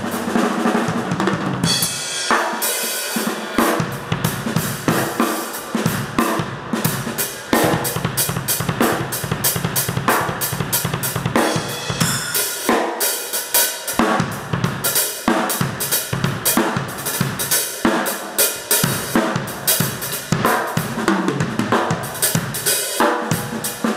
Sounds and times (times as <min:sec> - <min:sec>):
Drum kit: 0:00.0 - 0:23.9
Rimshot: 0:00.0 - 0:23.9
Bass drum: 0:05.9 - 0:12.4.